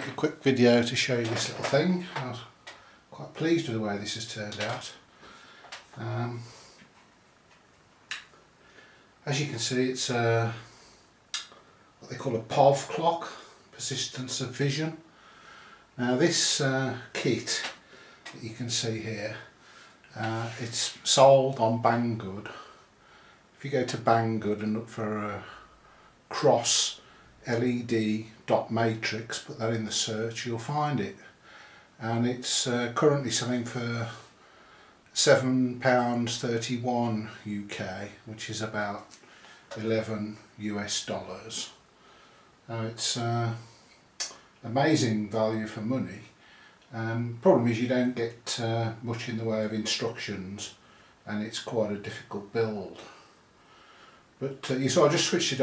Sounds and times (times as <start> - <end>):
Speech: 0.0 - 5.1, 5.9 - 6.7, 9.2 - 10.8, 11.4 - 15.1, 16.0 - 22.8, 23.6 - 25.7, 26.3 - 31.4, 32.0 - 34.3, 35.1 - 41.8, 42.7 - 53.3, 54.4 - 55.6.